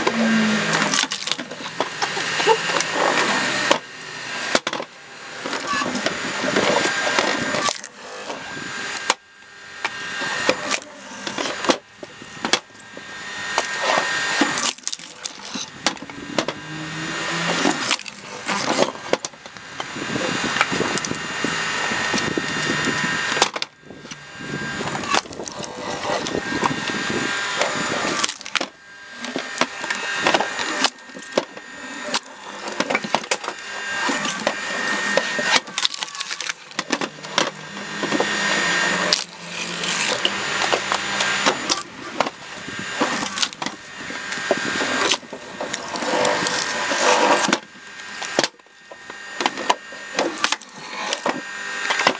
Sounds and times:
Splinter: 0.0s - 52.1s.

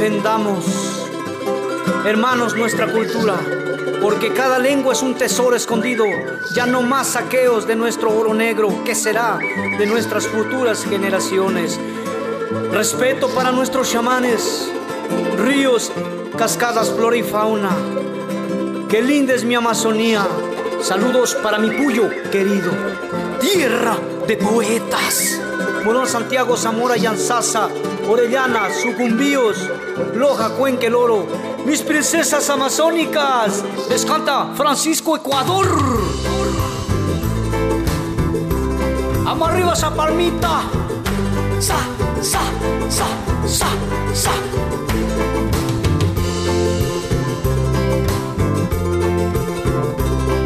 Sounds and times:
Speech: 0.0s - 1.0s, 2.0s - 3.4s, 4.0s - 11.8s, 12.7s - 14.8s, 15.4s - 17.8s, 18.9s - 36.3s, 39.2s - 40.8s, 41.6s - 44.5s.

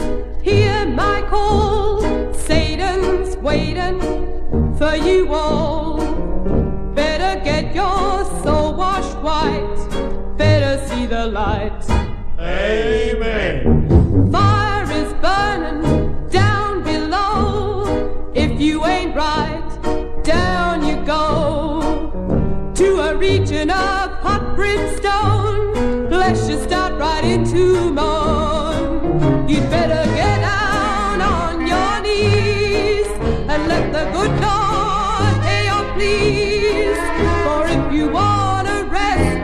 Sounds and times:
Music: 0.0s - 39.4s.

